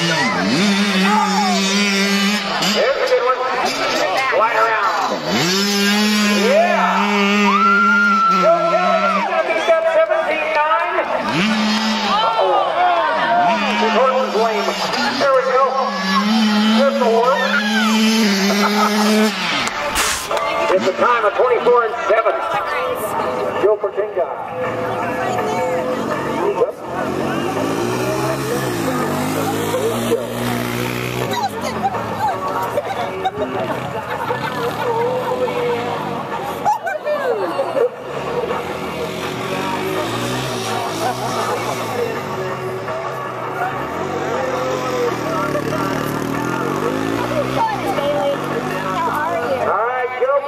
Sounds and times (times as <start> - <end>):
Motorcycle: 0.0 - 50.4.